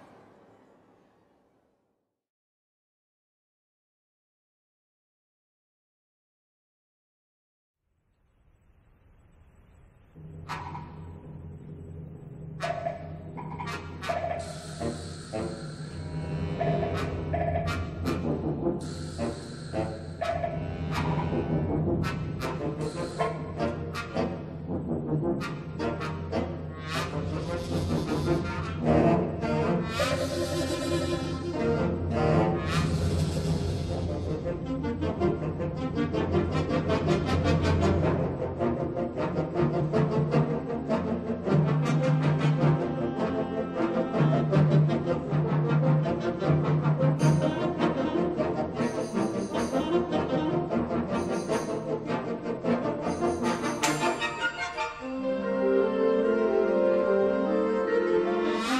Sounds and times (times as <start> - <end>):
Music: 10.1 - 58.7.